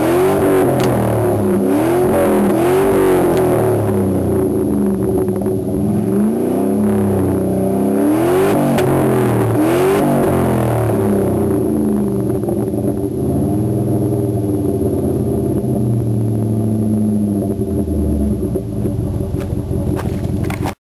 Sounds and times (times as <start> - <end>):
Rattle: 18.5 - 20.8.